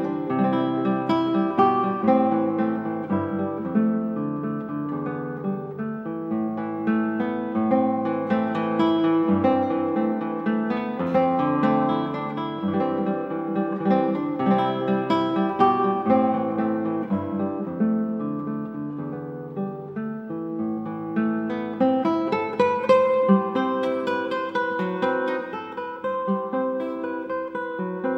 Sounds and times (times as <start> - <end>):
Strum: 0.0 - 28.1.